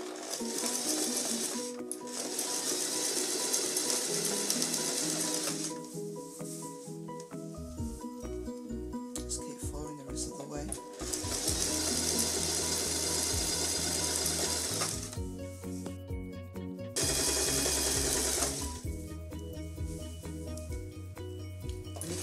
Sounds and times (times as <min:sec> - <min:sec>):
Music: 0:00.0 - 0:22.2
Speech: 0:09.2 - 0:10.8.